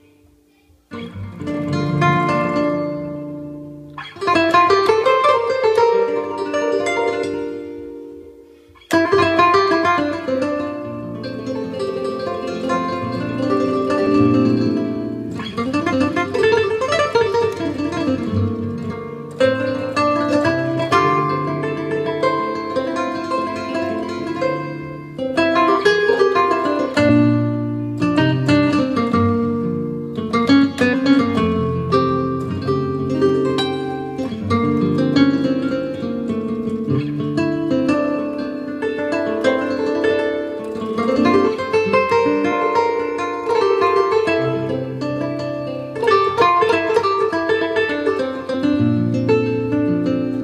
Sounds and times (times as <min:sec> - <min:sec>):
Strum: 0:00.0 - 0:50.4.